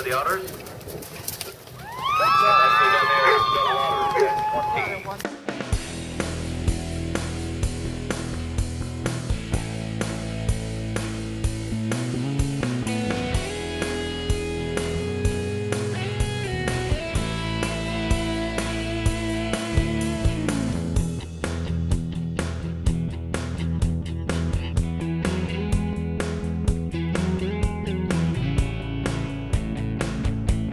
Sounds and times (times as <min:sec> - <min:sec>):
Music: 0:04.7 - 0:30.7.